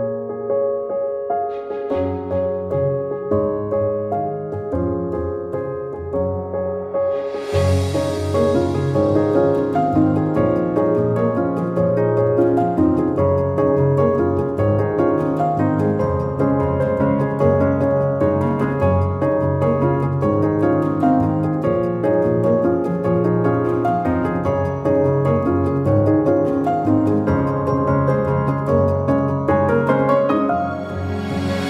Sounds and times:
Music: 0.0s - 31.6s.

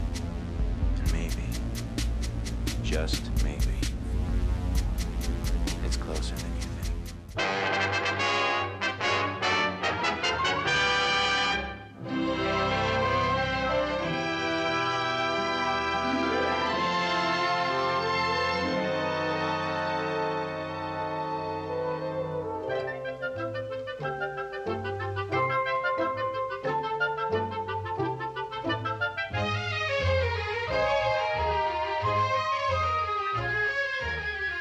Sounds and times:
Music: 0.0s - 34.6s.

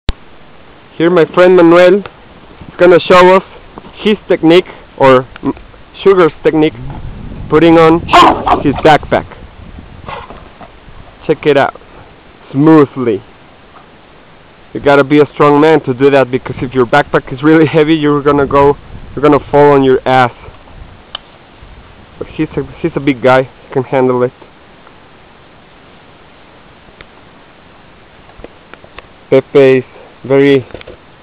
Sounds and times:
Outside, rural or natural: 0.0s - 31.2s
Speech: 0.9s - 2.1s, 2.8s - 6.9s, 7.5s - 9.4s, 11.2s - 11.8s, 12.5s - 13.3s, 14.8s - 20.4s, 22.2s - 24.4s, 29.3s - 30.7s
Dog: 8.1s - 8.8s.

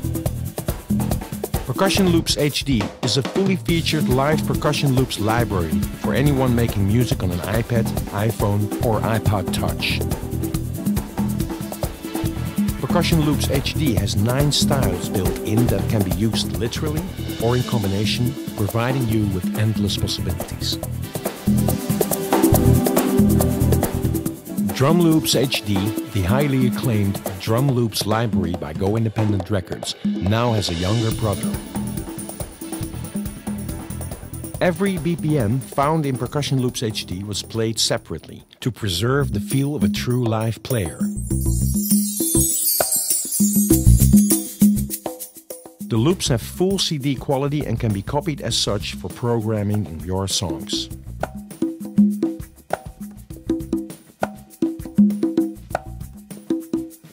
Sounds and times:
Music: 0.0s - 57.1s
Speech: 1.7s - 10.0s, 12.8s - 20.8s, 24.8s - 31.6s, 34.6s - 41.1s, 45.9s - 51.0s.

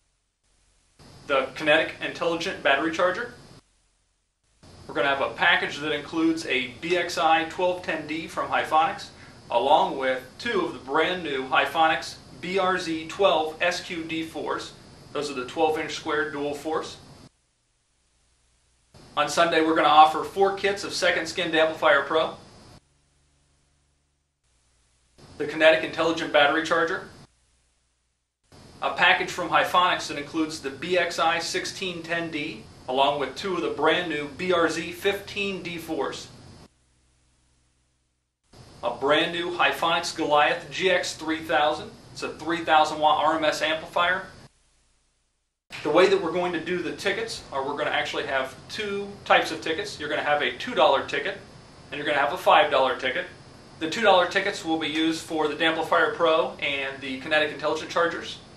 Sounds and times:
Speech: 1.3s - 3.4s, 4.9s - 17.0s, 19.2s - 22.4s, 25.4s - 27.2s, 28.8s - 36.3s, 38.8s - 44.4s, 45.8s - 58.5s.

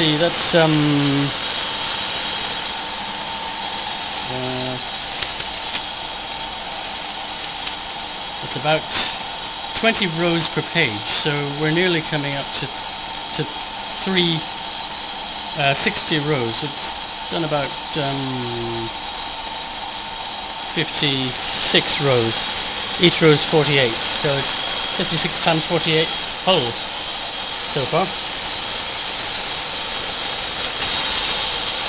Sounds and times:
Speech: 0.0s - 1.4s, 4.2s - 4.9s, 8.4s - 9.2s, 9.8s - 12.8s, 13.4s - 14.5s, 15.6s - 18.9s, 20.7s - 22.4s, 23.0s - 26.8s, 27.7s - 28.2s
Dental drill, dentist's drill: 0.0s - 31.8s
Electric toothbrush: 0.0s - 31.8s.

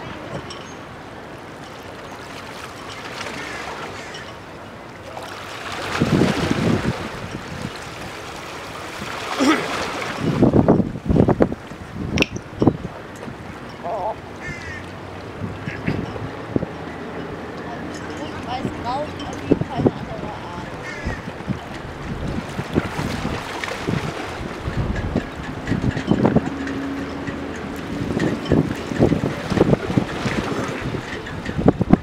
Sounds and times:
Ocean: 0.0s - 32.0s.

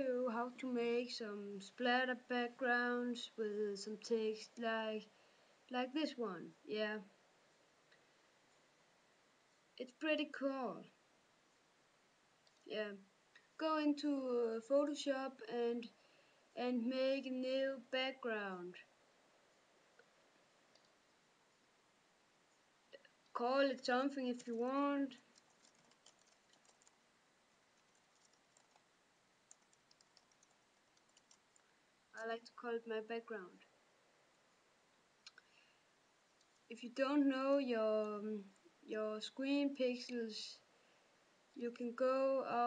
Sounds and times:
Speech: 0.0s - 5.1s, 5.7s - 7.1s, 9.8s - 10.9s, 12.7s - 16.0s, 16.6s - 18.9s, 23.4s - 25.2s, 32.2s - 33.6s, 36.7s - 40.6s, 41.6s - 42.6s.

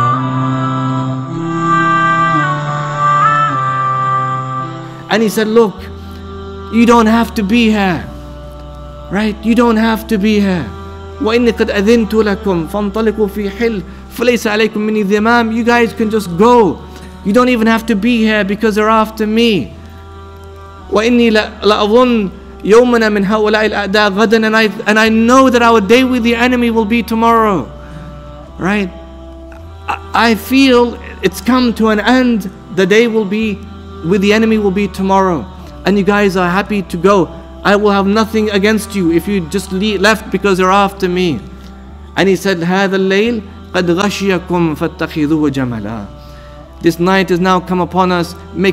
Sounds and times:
Music: 0.0s - 48.7s
Narration, monologue: 4.6s - 48.7s
Male speech, man speaking: 5.1s - 5.9s, 6.8s - 8.1s, 9.1s - 19.7s, 20.9s - 27.7s, 28.6s - 28.9s, 29.9s - 41.4s, 42.2s - 46.2s, 46.8s - 48.7s.

